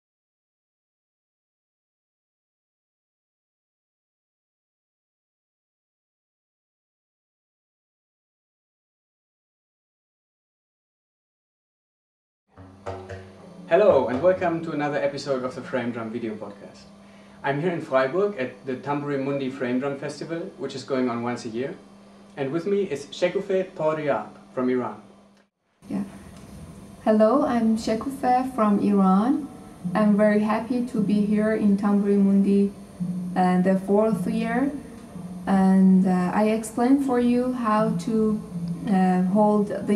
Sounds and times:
Speech: 0:13.5 - 0:21.8, 0:22.4 - 0:25.0, 0:25.9 - 0:26.1, 0:27.1 - 0:32.8, 0:33.4 - 0:34.8, 0:35.5 - 0:39.9.

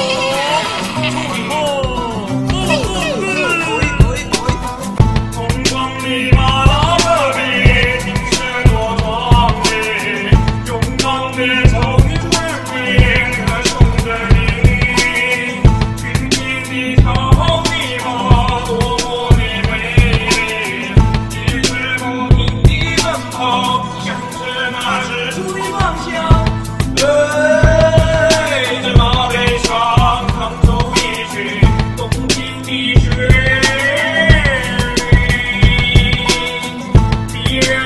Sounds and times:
Music: 0:00.0 - 0:37.8.

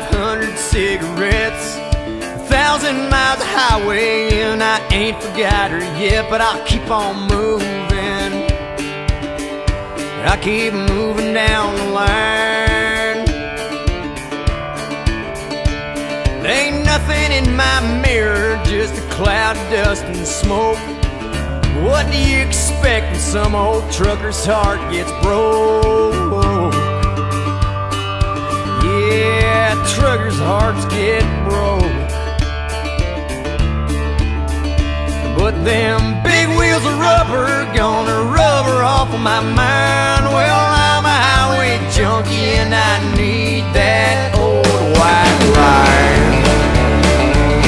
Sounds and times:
Music: 0:00.0 - 0:47.6.

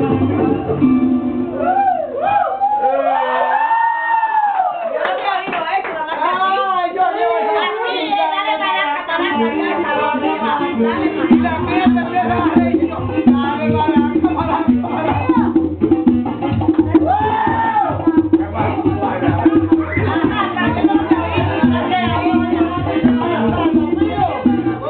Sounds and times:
Music: 0:00.0 - 0:02.9, 0:07.6 - 0:24.8.

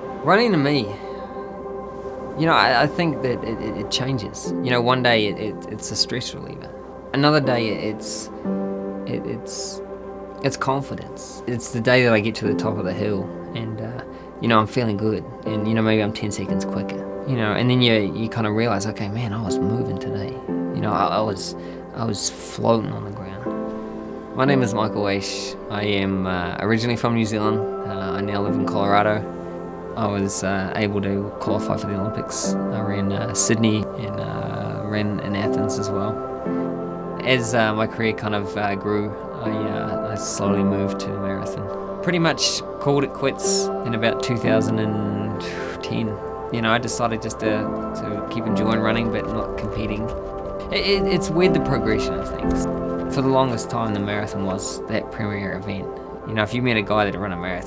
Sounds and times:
Music: 0:00.0 - 0:57.6
Speech: 0:00.2 - 0:01.0, 0:02.4 - 0:08.3, 0:09.1 - 0:09.8, 0:10.4 - 0:23.5, 0:24.4 - 0:29.3, 0:30.0 - 0:36.2, 0:37.2 - 0:57.6.

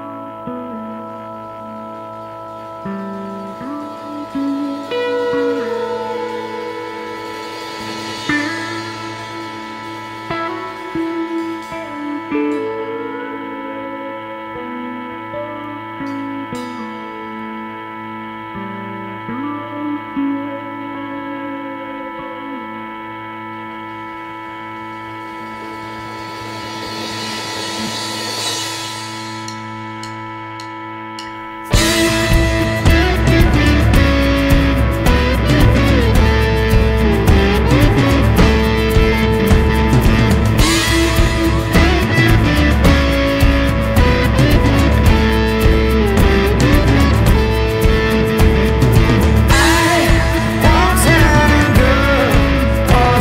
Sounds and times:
Music: 0:00.0 - 0:53.2.

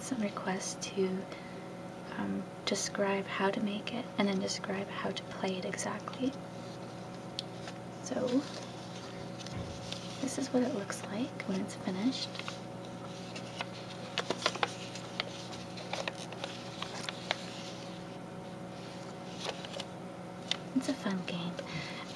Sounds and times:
Speech: 0:00.0 - 0:01.3, 0:02.1 - 0:06.4, 0:08.0 - 0:08.5, 0:10.2 - 0:12.3, 0:20.7 - 0:21.6.

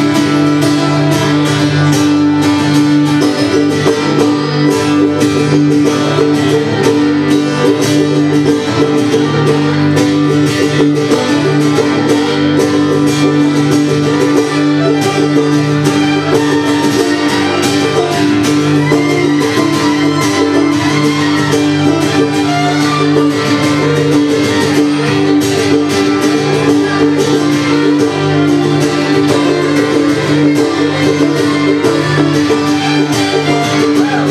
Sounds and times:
Acoustic guitar: 0:00.0 - 0:34.3
Cello: 0:00.0 - 0:34.3
Pizzicato: 0:00.0 - 0:34.3.

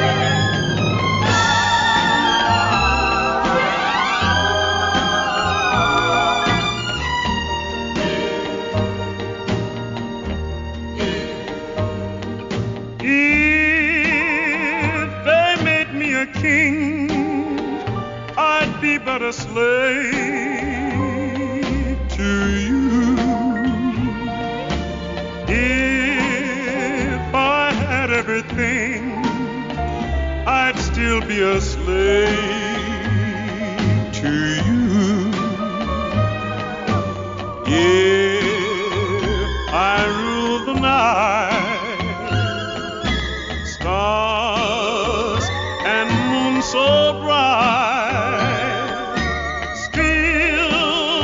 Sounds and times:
Music: 0:00.0 - 0:51.2.

